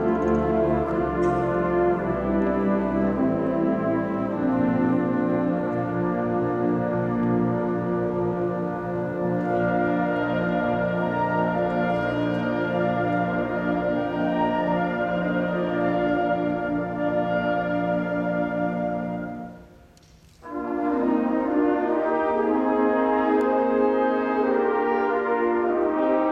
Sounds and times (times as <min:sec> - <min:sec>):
Music: 0:00.0 - 0:26.3.